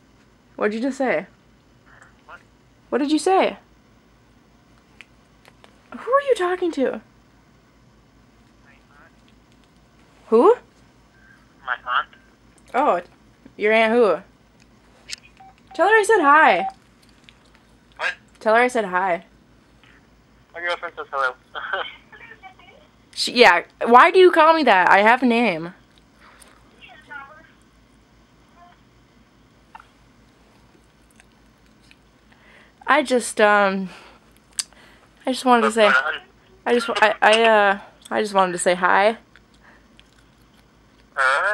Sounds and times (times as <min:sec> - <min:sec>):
Conversation: 0:00.4 - 0:41.5
Female speech, woman speaking: 0:00.6 - 0:01.3, 0:02.9 - 0:03.6, 0:06.0 - 0:07.1, 0:10.3 - 0:10.7, 0:12.7 - 0:14.3, 0:15.8 - 0:16.7, 0:18.4 - 0:19.3, 0:21.9 - 0:25.8, 0:26.8 - 0:27.6, 0:32.8 - 0:33.9, 0:35.2 - 0:39.2.